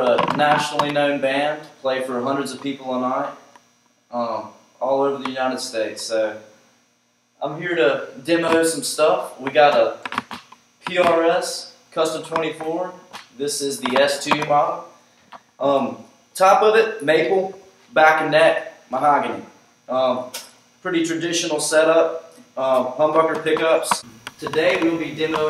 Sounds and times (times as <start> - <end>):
Speech: 0.0 - 3.4, 4.1 - 6.5, 7.4 - 10.0, 10.8 - 15.0, 15.6 - 25.5.